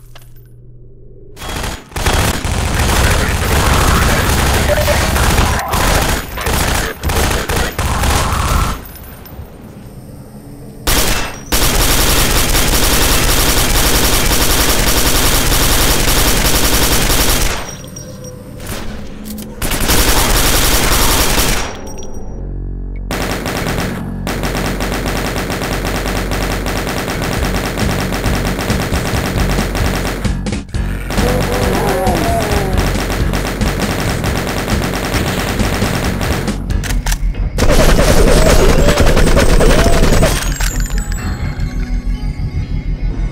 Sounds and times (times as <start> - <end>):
Fusillade: 1.4 - 8.8, 10.9 - 17.8, 19.6 - 21.9, 23.1 - 30.5, 31.1 - 36.7, 37.6 - 40.7.